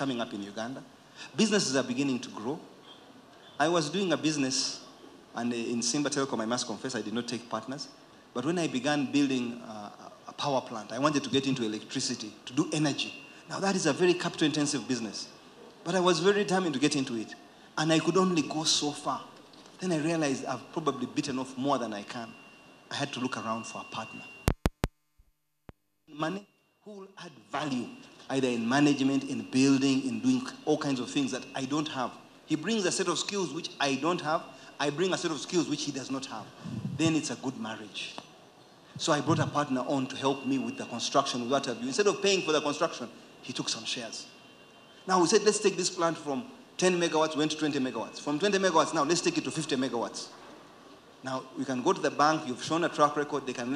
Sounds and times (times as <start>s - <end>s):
Speech: 0.0s - 2.7s, 3.6s - 22.3s, 22.9s - 24.3s, 26.1s - 38.2s, 39.0s - 44.3s, 45.1s - 50.3s, 51.2s - 53.7s.